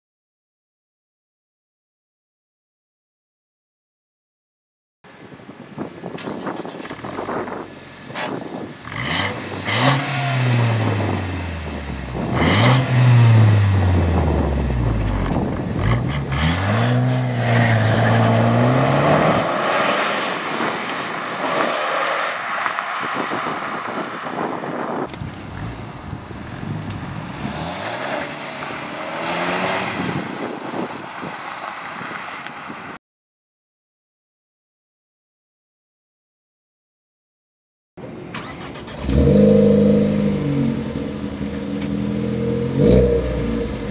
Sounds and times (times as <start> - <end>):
Outside, urban or manmade: 5.0 - 33.0, 38.0 - 43.9
Car: 5.6 - 33.0, 38.0 - 43.9
Medium engine (mid frequency): 5.9 - 19.3, 22.4 - 31.0, 38.0 - 43.9.